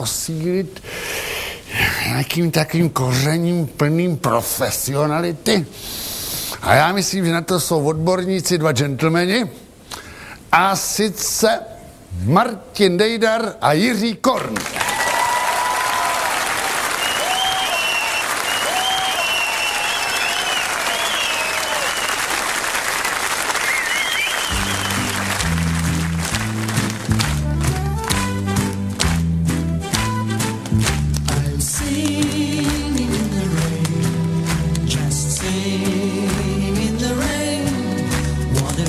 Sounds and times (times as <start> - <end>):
Music: 24.2 - 38.8
Male singing: 31.3 - 38.8.